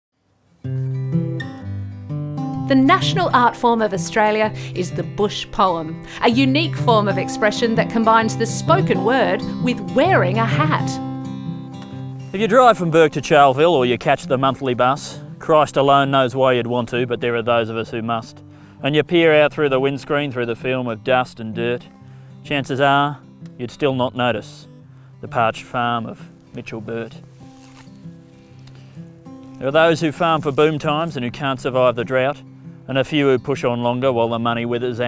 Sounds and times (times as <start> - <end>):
Acoustic guitar: 0.2 - 35.0.